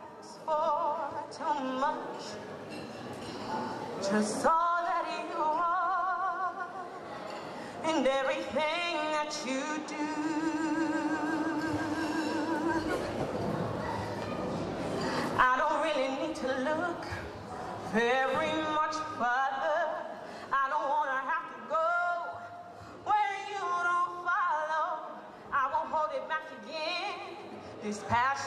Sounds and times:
Female singing: 0:00.0 - 0:02.4, 0:04.0 - 0:06.9, 0:07.8 - 0:13.1, 0:15.4 - 0:28.4.

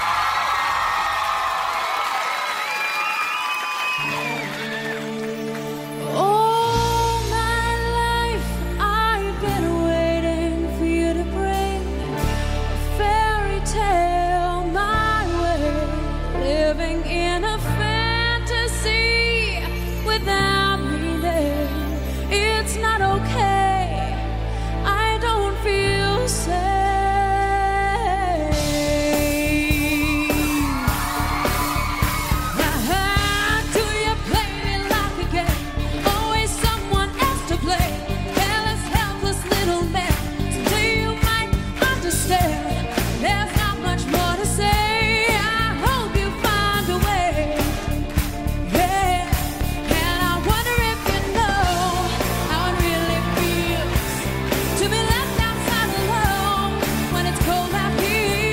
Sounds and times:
Music: 0:00.0 - 0:58.5.

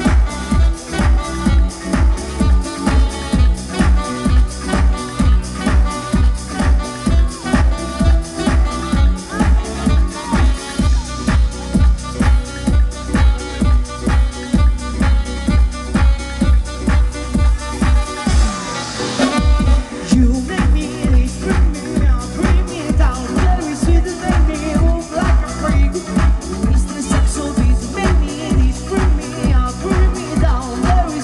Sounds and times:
Music: 0:00.0 - 0:31.2.

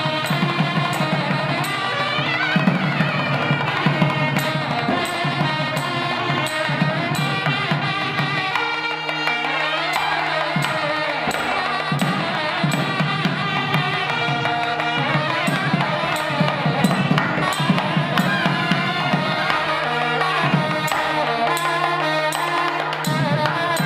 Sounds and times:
Tabla: 0:00.0 - 0:23.8.

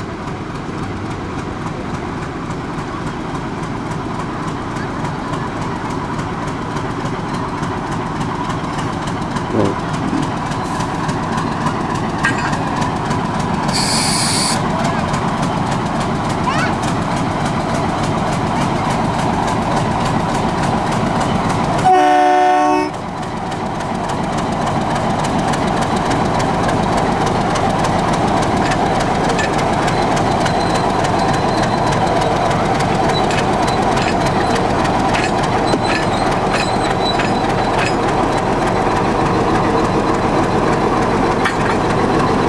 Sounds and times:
Railroad car, train wagon: 0:00.0 - 0:42.4
Train horn: 0:21.8 - 0:23.0.

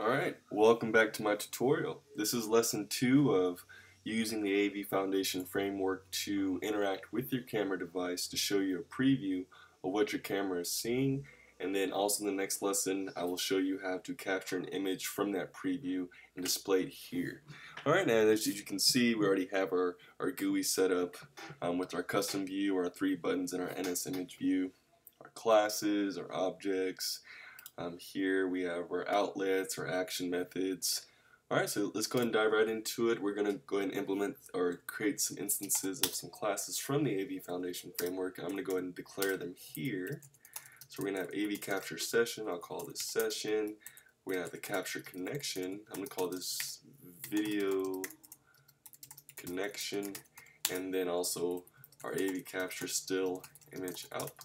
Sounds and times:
Speech: 0:00.0 - 0:40.3, 0:40.9 - 0:48.2, 0:49.3 - 0:54.4.

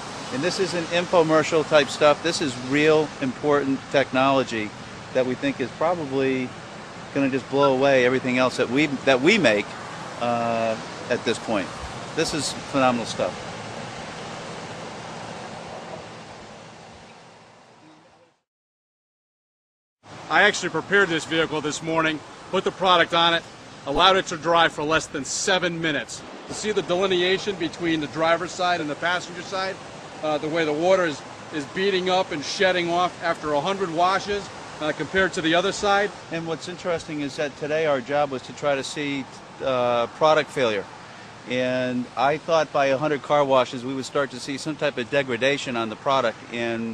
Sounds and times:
Car: 0:00.0 - 0:18.3.

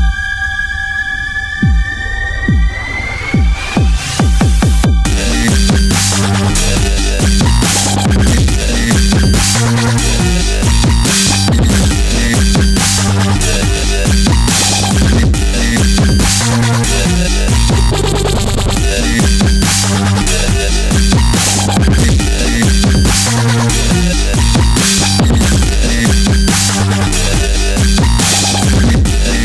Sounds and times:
Drum and bass: 0:00.0 - 0:29.4.

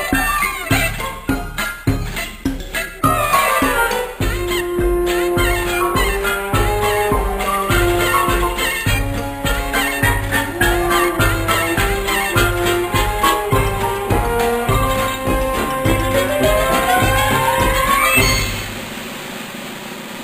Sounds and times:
Music: 0:00.0 - 0:19.0.

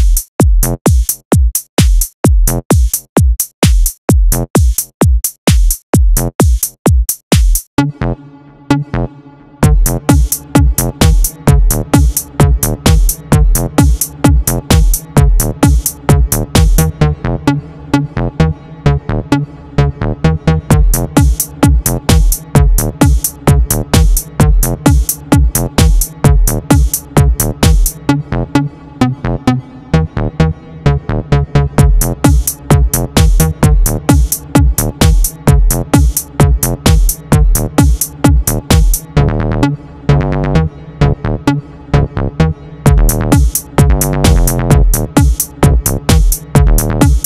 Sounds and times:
Techno: 0:00.0 - 0:47.2.

